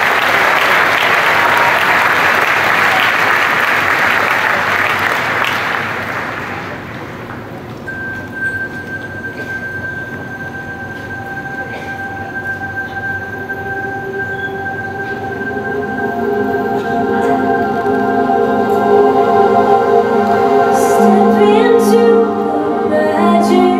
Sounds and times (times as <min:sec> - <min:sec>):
Applause: 0:00.0 - 0:07.5.